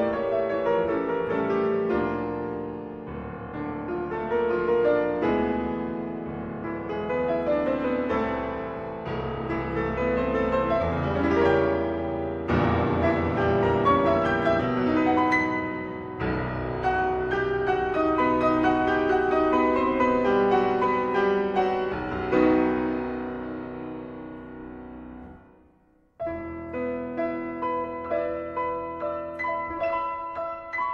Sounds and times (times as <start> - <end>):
Piano: 0.0 - 30.9.